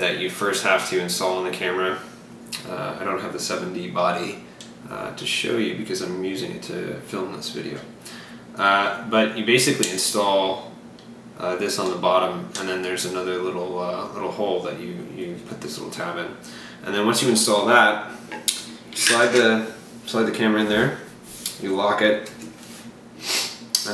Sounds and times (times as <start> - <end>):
Speech: 0.0 - 7.9, 8.6 - 10.7, 11.4 - 18.1, 19.0 - 22.4.